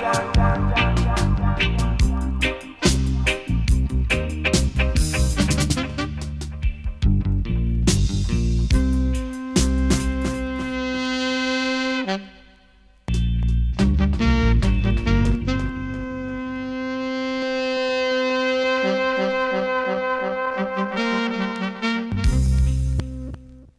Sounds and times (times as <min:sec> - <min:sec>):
Trombone: 0:00.0 - 0:06.8, 0:08.6 - 0:12.5, 0:13.8 - 0:23.0
Trumpet: 0:00.0 - 0:07.0, 0:08.6 - 0:13.0, 0:13.8 - 0:23.4.